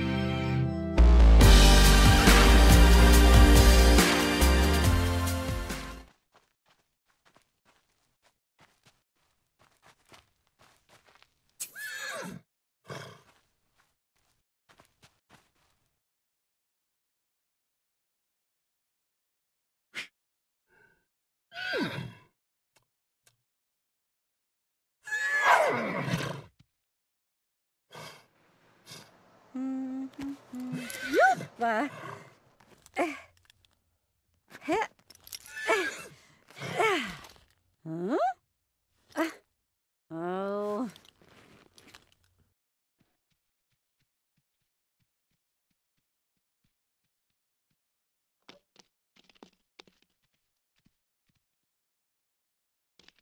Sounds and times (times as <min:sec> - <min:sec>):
Neigh, whinny: 0:11.7 - 0:13.3, 0:21.6 - 0:22.3, 0:25.0 - 0:26.5, 0:35.4 - 0:36.8.